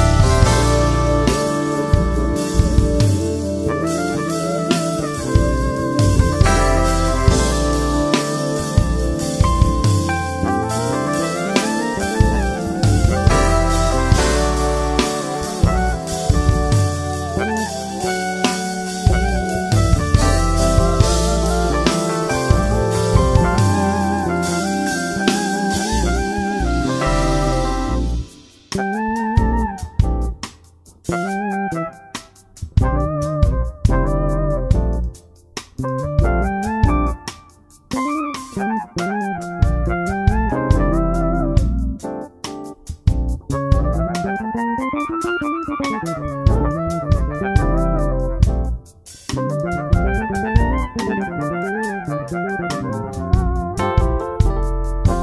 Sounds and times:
Electronic organ: 0:00.0 - 0:55.2.

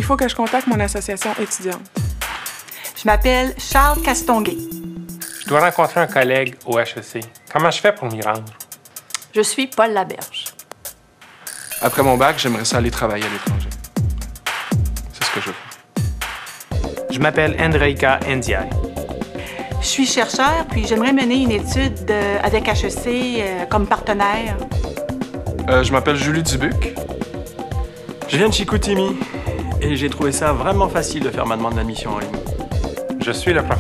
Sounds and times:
Speech: 0:00.0 - 0:01.9, 0:02.9 - 0:04.6, 0:05.5 - 0:08.5, 0:09.4 - 0:10.5, 0:11.8 - 0:13.7, 0:15.2 - 0:15.7, 0:17.1 - 0:18.7, 0:19.8 - 0:24.6, 0:25.7 - 0:27.0, 0:28.3 - 0:32.4, 0:33.2 - 0:33.8
Music: 0:00.0 - 0:33.8.

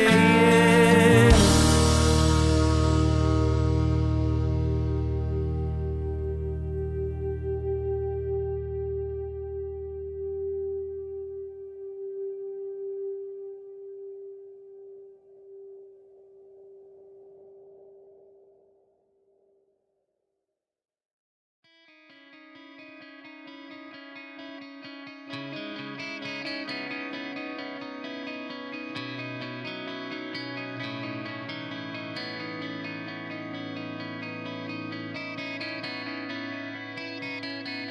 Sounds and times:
Music: 0:00.0 - 0:19.5, 0:21.6 - 0:37.9.

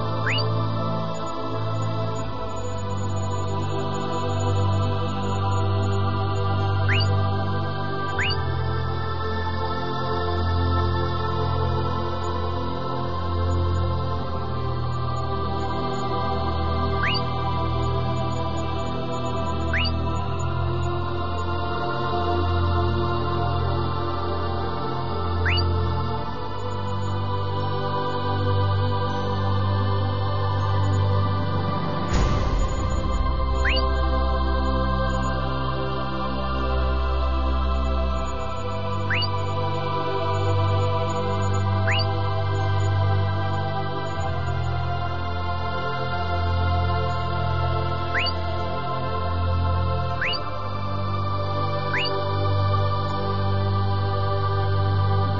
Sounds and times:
New-age music: 0:00.0 - 0:55.3.

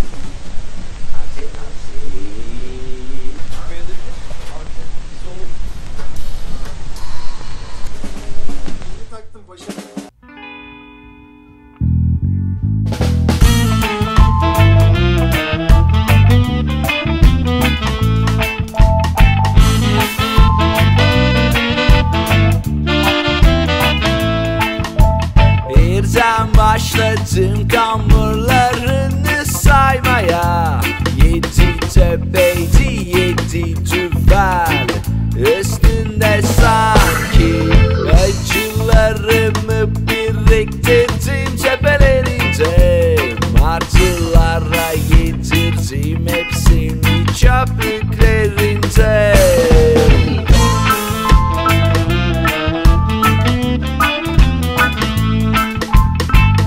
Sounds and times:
Ska: 0:12.9 - 0:56.6.

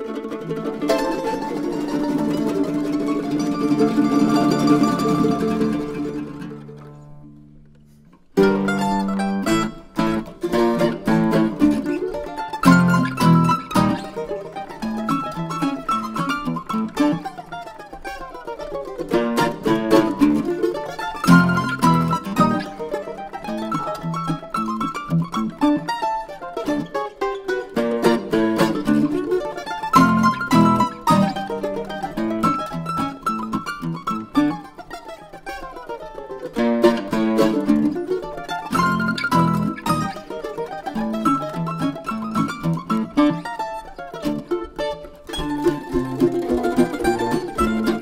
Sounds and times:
Classical music: 0:00.0 - 0:18.0, 0:18.7 - 0:48.0
Zither: 0:00.0 - 0:35.3.

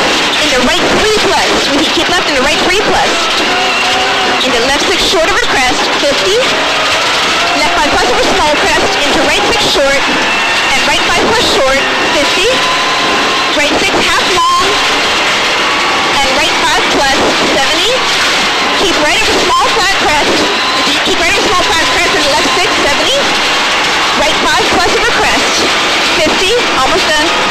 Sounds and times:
Speech: 0:00.4 - 0:03.5, 0:04.4 - 0:06.5, 0:07.6 - 0:12.7, 0:13.6 - 0:14.8, 0:16.2 - 0:18.1, 0:18.8 - 0:23.3, 0:24.2 - 0:27.4.

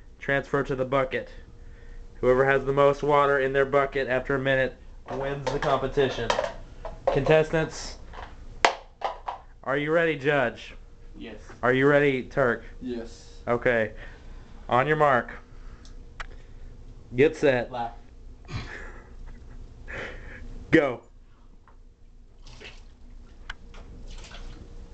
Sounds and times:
Speech: 0:00.2 - 0:01.4, 0:02.2 - 0:06.3, 0:07.1 - 0:08.0, 0:17.2 - 0:18.0, 0:20.7 - 0:21.1.

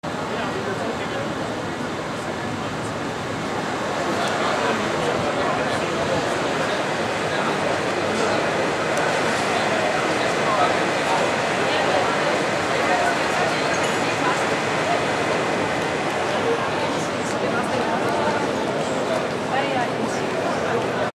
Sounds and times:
Speech: 0:00.1 - 0:21.1.

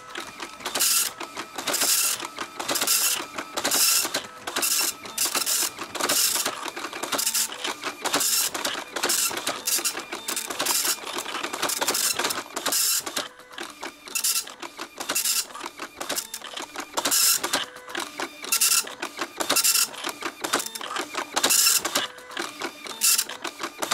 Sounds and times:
Printer: 0:00.0 - 0:23.9.

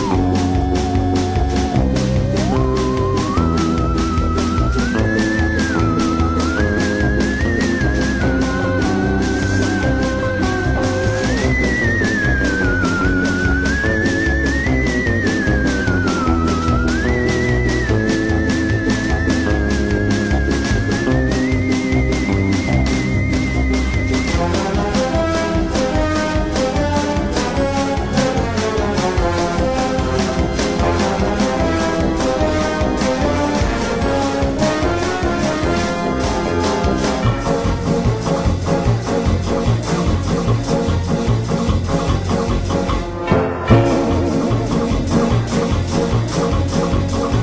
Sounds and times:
Music: 0:00.0 - 0:47.4.

